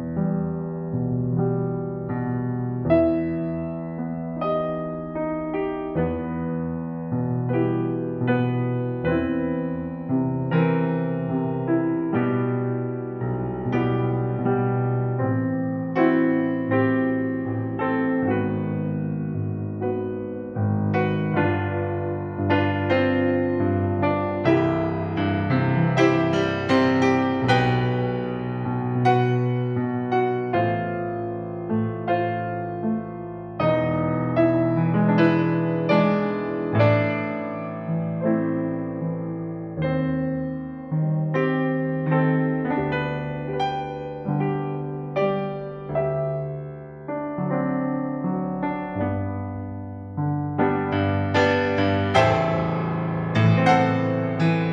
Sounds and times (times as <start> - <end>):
Music: 0.0 - 54.7.